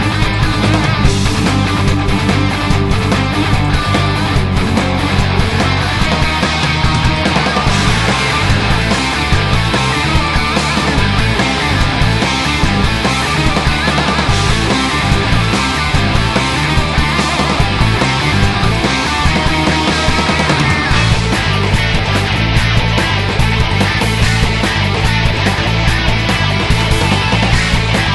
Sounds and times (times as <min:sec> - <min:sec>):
Music: 0:00.0 - 0:28.1.